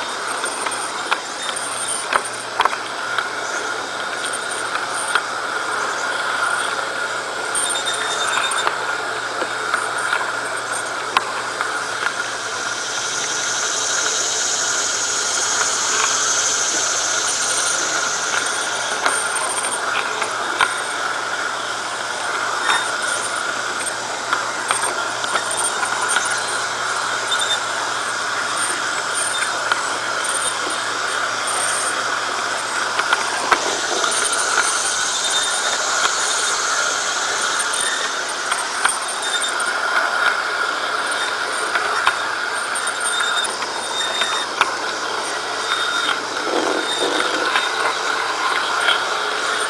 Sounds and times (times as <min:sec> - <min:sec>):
Railroad car, train wagon: 0:00.0 - 0:49.6
Train: 0:00.0 - 0:49.6.